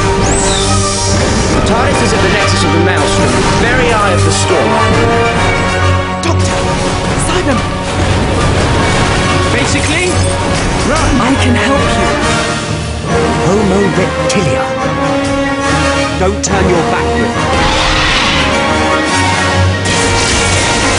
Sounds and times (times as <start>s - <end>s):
Music: 0.0s - 20.9s.